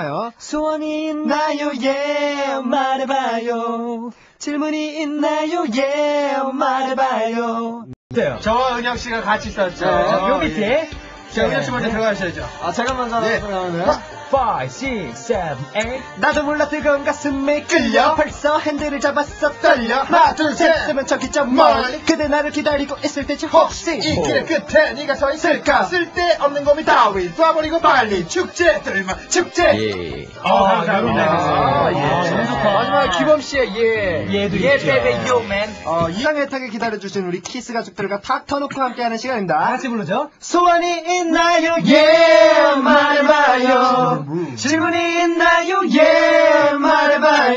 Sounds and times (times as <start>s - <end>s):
Speech: 8.1s - 41.5s
Music: 8.1s - 47.5s.